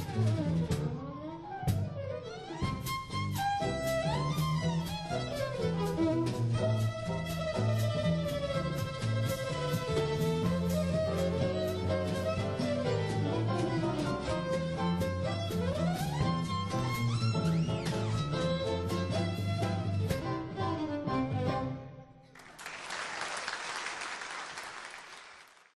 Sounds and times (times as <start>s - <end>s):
Violin, fiddle: 0.0s - 22.2s.